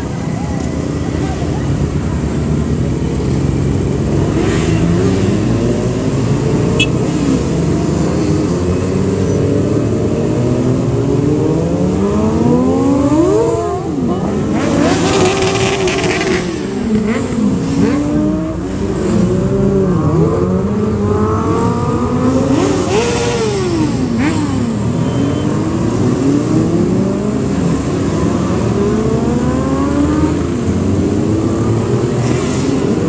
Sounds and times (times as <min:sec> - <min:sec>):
Motorcycle: 0:00.0 - 0:33.0.